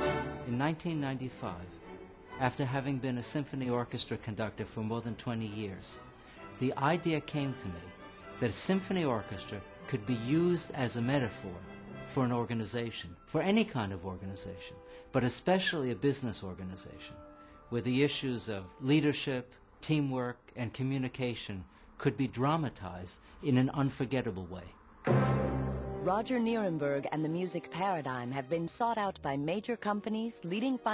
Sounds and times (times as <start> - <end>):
Music: 0.0 - 20.1, 24.8 - 30.9
Male speech, man speaking: 0.4 - 1.8, 2.4 - 6.0, 6.6 - 24.8.